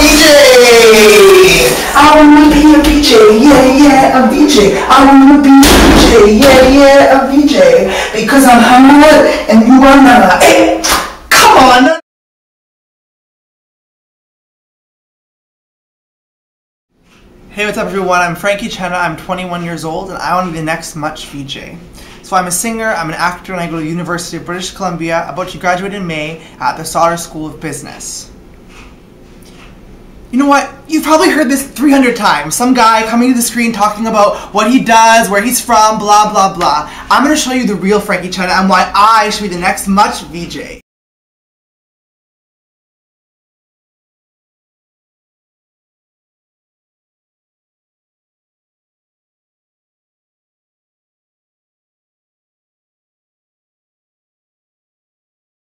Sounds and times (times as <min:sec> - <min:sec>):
Speech: 0:00.0 - 0:12.0, 0:17.5 - 0:28.3, 0:30.3 - 0:40.8.